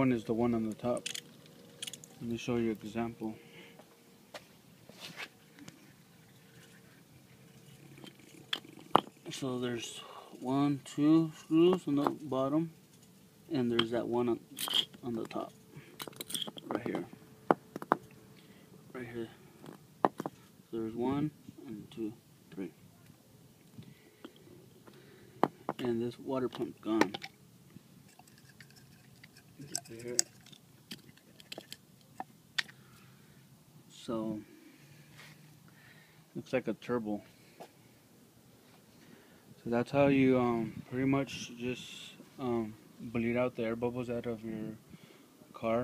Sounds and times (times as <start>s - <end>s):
Speech: 2.2s - 3.4s, 9.3s - 12.7s, 15.0s - 15.5s, 19.0s - 19.4s, 20.7s - 22.8s, 25.8s - 27.2s, 29.6s - 30.3s, 33.9s - 34.5s, 36.4s - 37.3s, 39.6s - 44.8s, 45.5s - 45.8s.